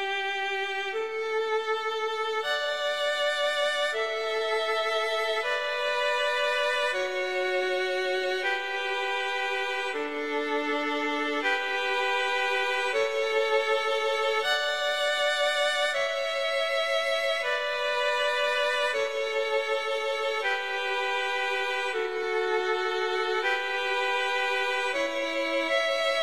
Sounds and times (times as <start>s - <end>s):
Music: 0.0s - 26.2s.